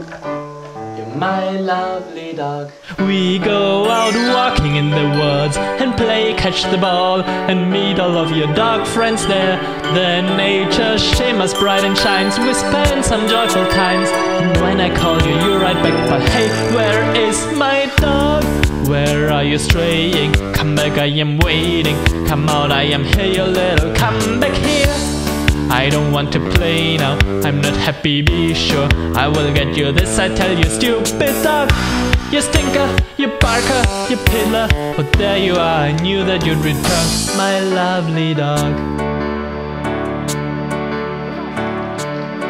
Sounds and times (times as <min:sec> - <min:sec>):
Music: 0:00.0 - 0:42.5.